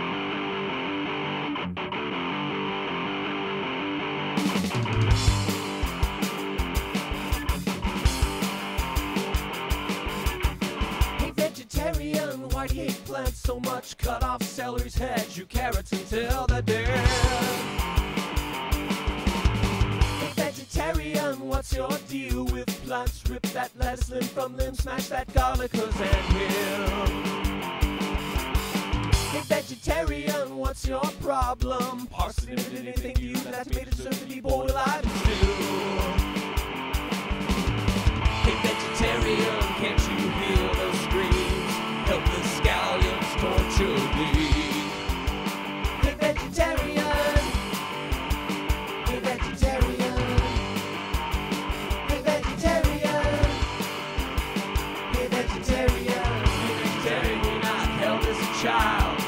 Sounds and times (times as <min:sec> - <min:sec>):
Music: 0:00.0 - 0:59.2.